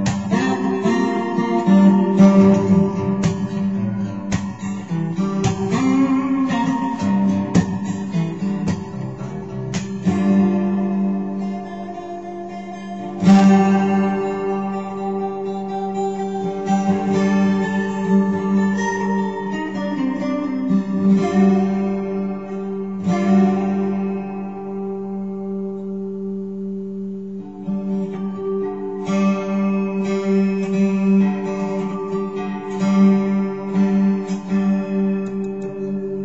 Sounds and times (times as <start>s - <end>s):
Acoustic guitar: 0.0s - 36.2s
Effects unit: 0.0s - 36.2s.